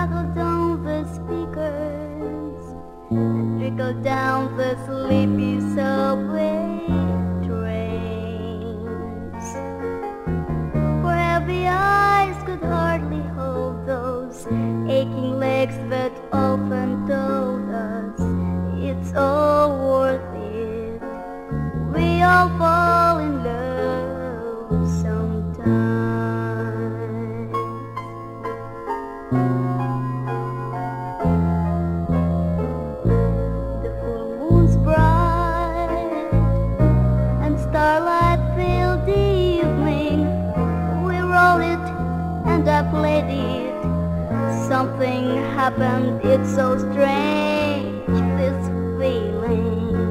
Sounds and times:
Music: 0:00.0 - 0:50.1.

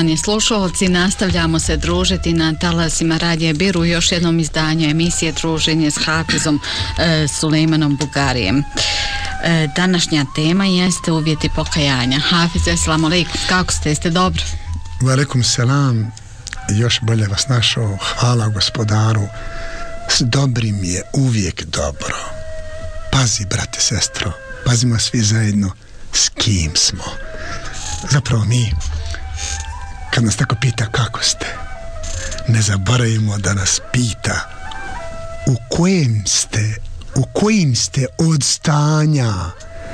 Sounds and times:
Speech: 0:00.0 - 0:19.3, 0:20.1 - 0:22.3, 0:23.1 - 0:34.5, 0:35.5 - 0:39.6
Music: 0:00.0 - 0:39.9.

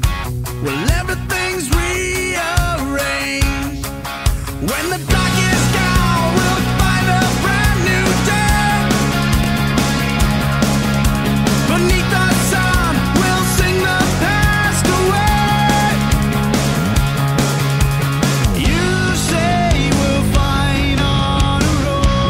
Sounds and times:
Happy music: 0:00.0 - 0:22.2
Soul music: 0:00.0 - 0:22.2.

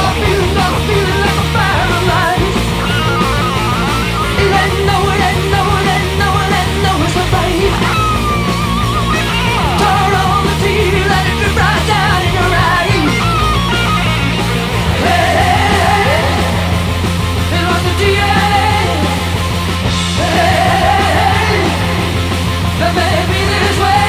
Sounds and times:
Punk rock: 0:00.0 - 0:24.0.

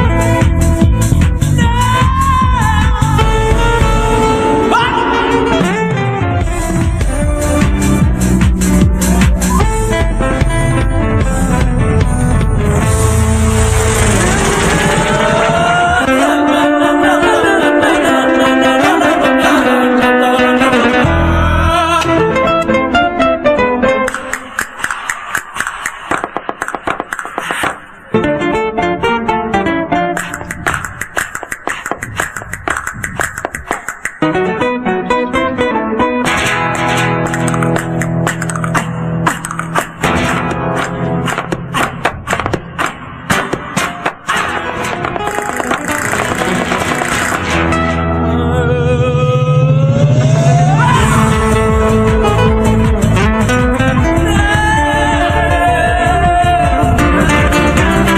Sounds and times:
Music: 0:00.0 - 0:58.1.

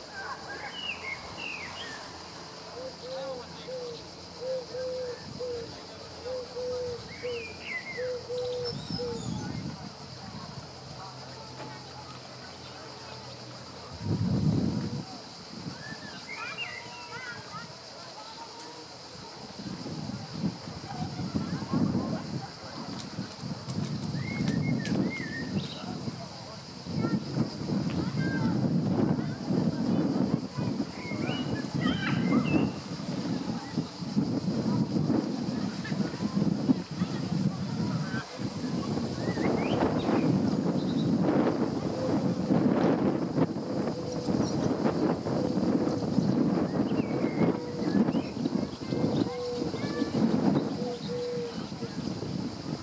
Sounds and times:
Speech: 0:08.7 - 0:23.8, 0:25.4 - 0:40.1, 0:47.4 - 0:52.8.

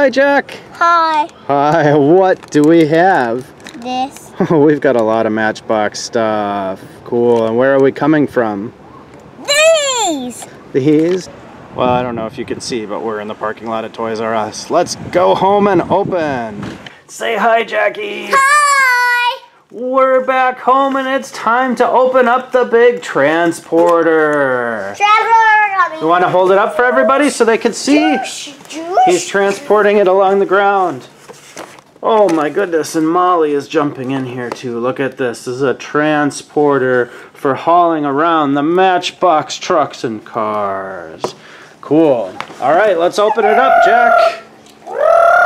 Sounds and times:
Outside, urban or manmade: 0:00.0 - 0:45.4
Child speech, kid speaking: 0:00.8 - 0:01.4, 0:03.7 - 0:04.4, 0:09.4 - 0:10.5, 0:18.1 - 0:19.6, 0:24.8 - 0:30.1, 0:43.2 - 0:45.4.

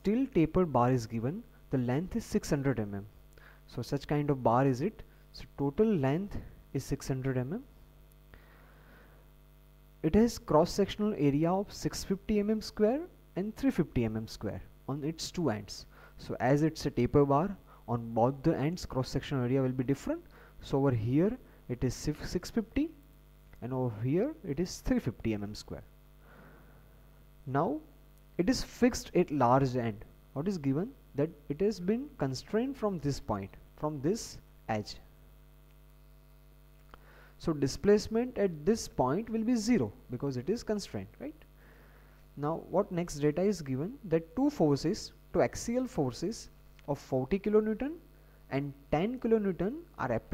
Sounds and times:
Speech: 0:00.0 - 0:07.7, 0:10.0 - 0:23.0, 0:23.6 - 0:25.9, 0:27.5 - 0:35.1, 0:37.4 - 0:41.5, 0:42.4 - 0:50.3.

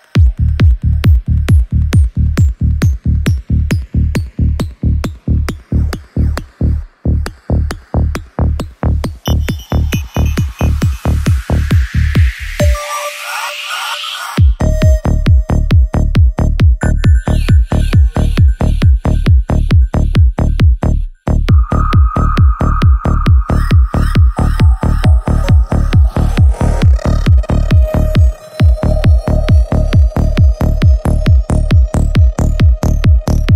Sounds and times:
Music: 0:00.0 - 0:33.5
Sound effect: 0:09.2 - 0:15.0, 0:21.5 - 0:31.2.

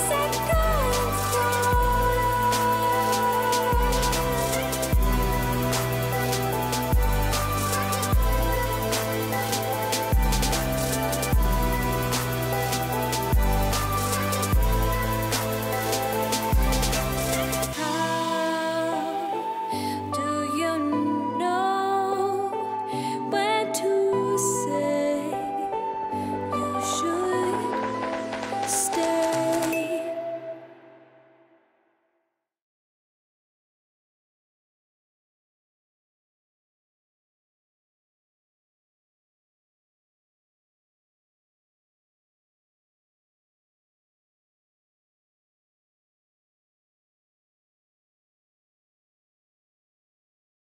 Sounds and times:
Music: 0:00.0 - 0:32.3.

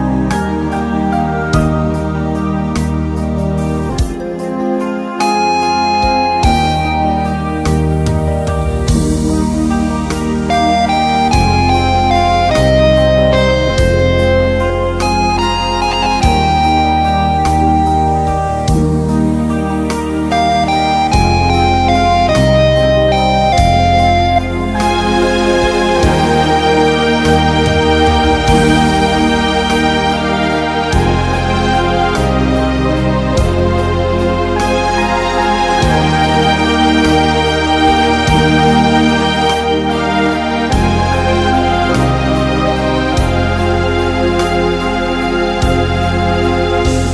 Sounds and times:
Electric piano: 0:00.0 - 0:47.1.

